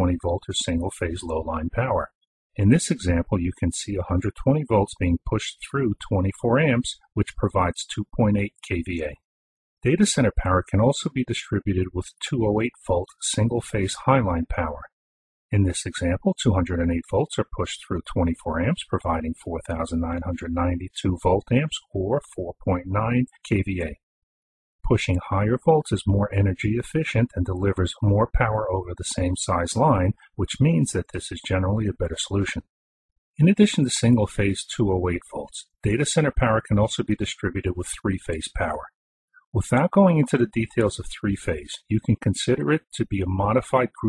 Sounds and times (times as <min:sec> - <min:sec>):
Narration, monologue: 0:00.0 - 0:24.0, 0:24.8 - 0:32.8, 0:33.4 - 0:44.0.